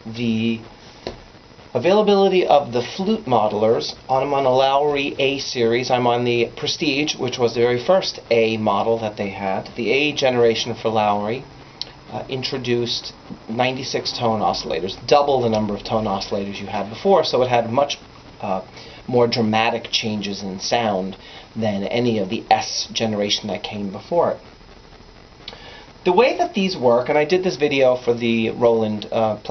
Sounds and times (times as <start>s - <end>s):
Speech: 0.0s - 0.7s, 1.8s - 11.5s, 12.1s - 24.4s, 26.1s - 29.5s.